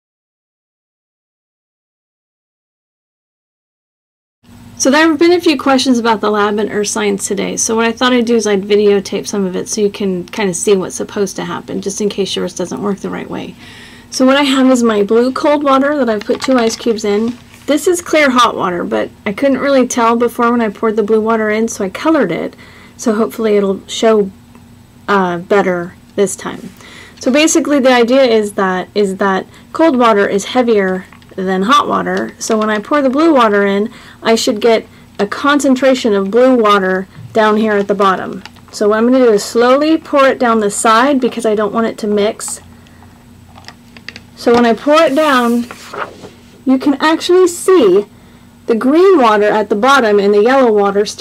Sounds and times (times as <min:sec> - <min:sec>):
Speech: 0:04.8 - 0:24.4, 0:25.1 - 0:42.7, 0:44.4 - 0:45.8, 0:46.7 - 0:48.1, 0:48.7 - 0:51.2.